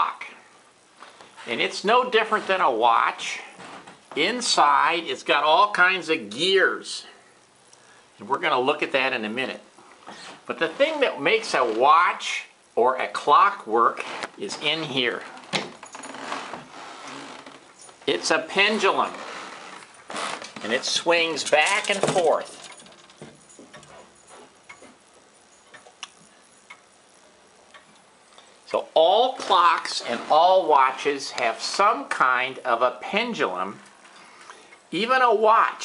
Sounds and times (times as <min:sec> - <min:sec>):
Speech: 0:00.0 - 0:00.4, 0:01.4 - 0:07.2, 0:08.2 - 0:09.7, 0:10.5 - 0:15.3, 0:18.1 - 0:19.2, 0:20.6 - 0:22.6, 0:28.7 - 0:33.8, 0:34.9 - 0:35.8.